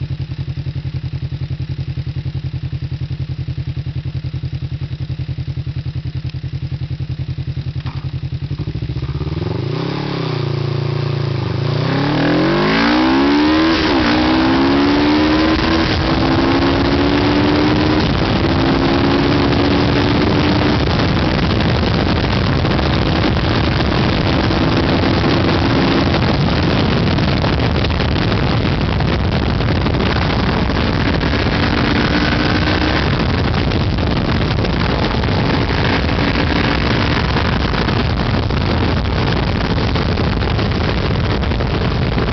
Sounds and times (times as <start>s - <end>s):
Vehicle: 0.0s - 42.3s.